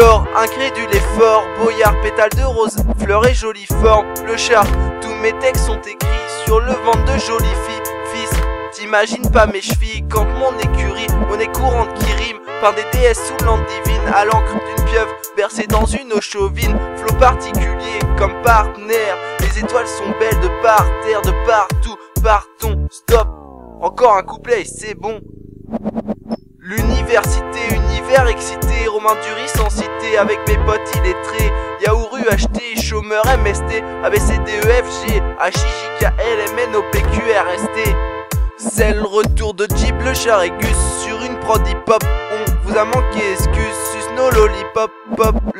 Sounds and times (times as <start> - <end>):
Music: 0.0 - 25.5, 26.2 - 45.5.